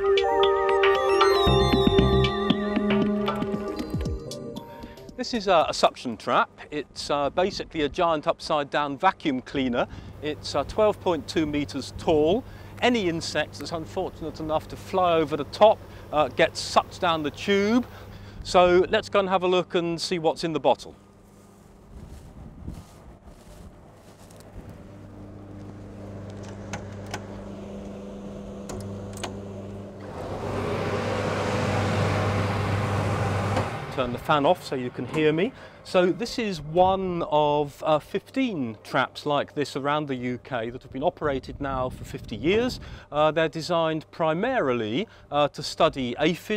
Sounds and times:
Speech: 5.2s - 21.0s, 33.9s - 46.5s
Outside, rural or natural: 20.9s - 27.6s, 28.6s - 38.0s.

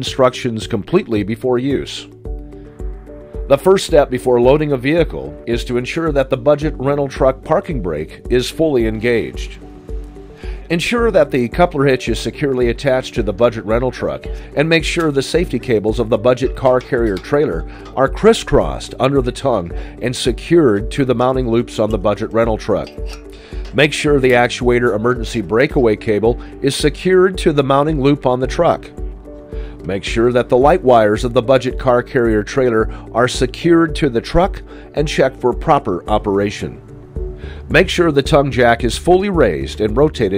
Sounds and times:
Speech: 0.0s - 2.1s, 3.5s - 9.6s, 10.7s - 23.0s, 23.8s - 28.9s, 29.9s - 36.8s, 37.7s - 40.3s
Music: 0.0s - 40.3s.

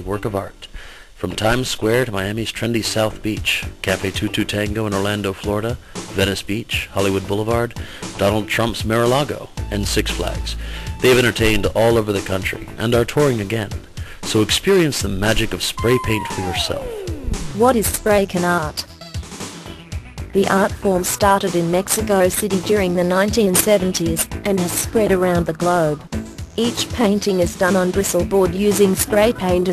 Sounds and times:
Speech: 0.0s - 18.9s, 20.4s - 29.7s
Music: 1.3s - 29.7s.

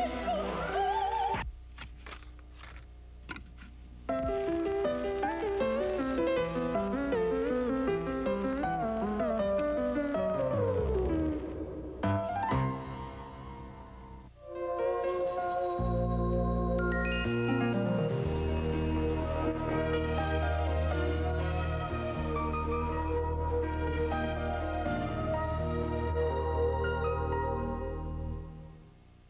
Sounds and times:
Music: 0.0s - 1.4s, 4.1s - 29.2s.

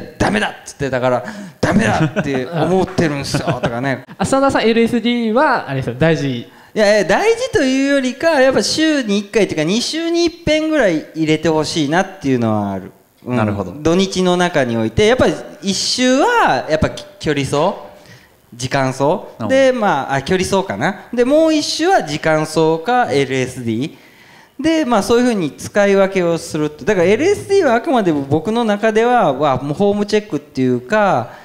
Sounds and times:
Speech: 0.0s - 24.0s, 24.6s - 31.4s
Inside, large room or hall: 0.0s - 31.4s.

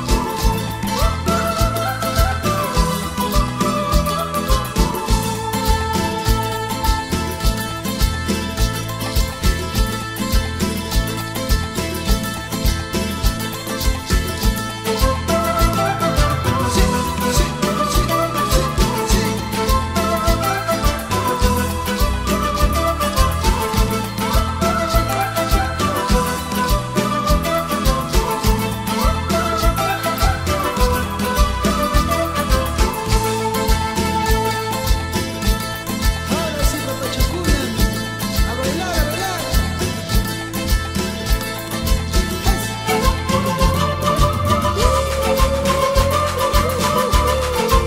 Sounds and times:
Rhythm and blues: 0.0s - 47.8s.

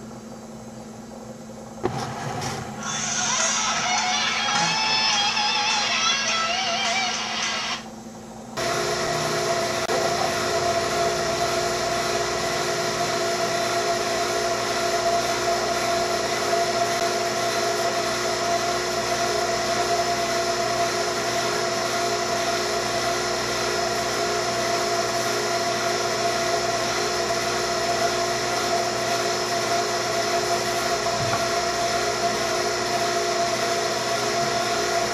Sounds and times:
Boiling: 0.9s - 6.3s, 7.0s - 35.1s
Music: 2.8s - 7.8s.

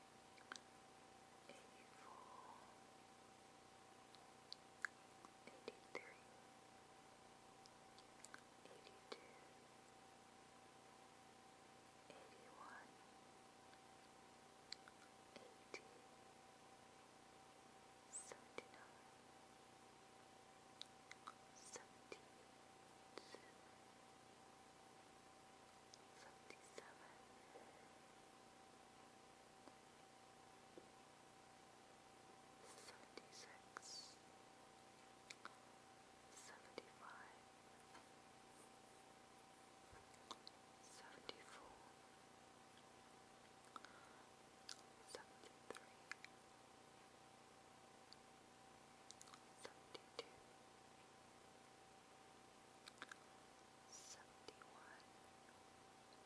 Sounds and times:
Silence: 0.0s - 56.2s.

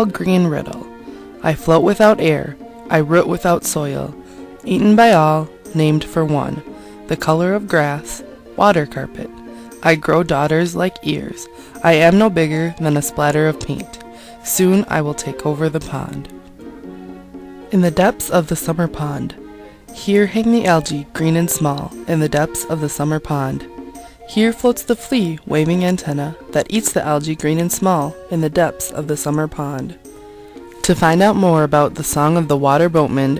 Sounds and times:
Speech: 0.0s - 16.3s, 17.7s - 19.4s, 20.0s - 23.7s, 24.3s - 30.0s, 30.8s - 33.4s
Music: 0.0s - 33.4s.

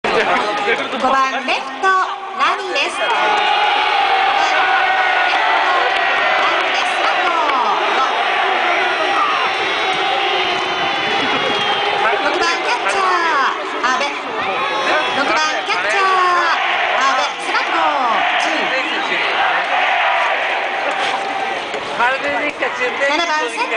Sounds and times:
Crowd: 0.0s - 23.7s.

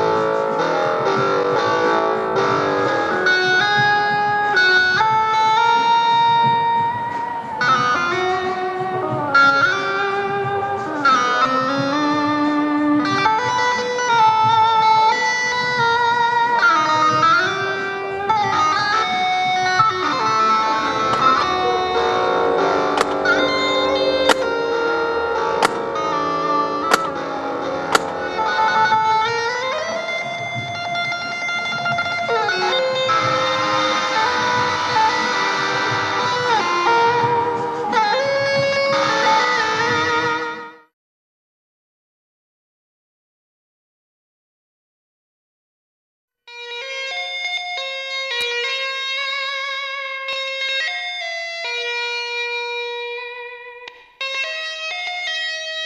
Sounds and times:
Electric guitar: 0.0s - 40.9s, 46.5s - 55.8s.

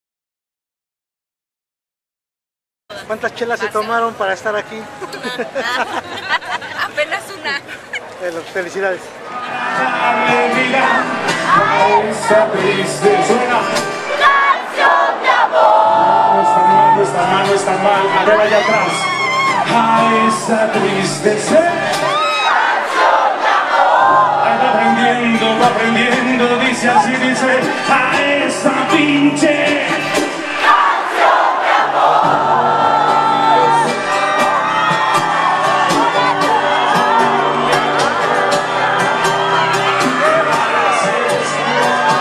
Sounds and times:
Music: 9.5s - 14.2s, 15.6s - 22.2s, 24.0s - 30.8s, 31.9s - 42.2s.

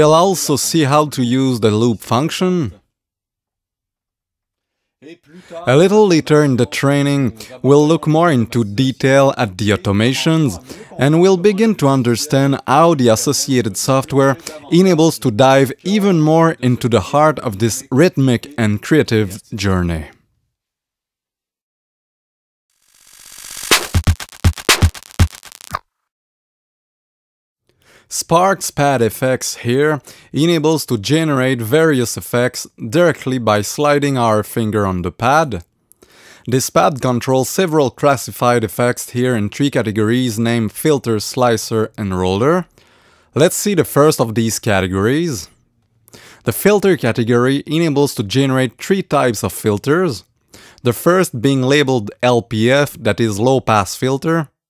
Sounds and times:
Speech: 0.0s - 2.8s, 5.0s - 20.2s, 28.1s - 35.7s, 36.5s - 42.7s, 43.4s - 45.6s, 46.4s - 54.6s.

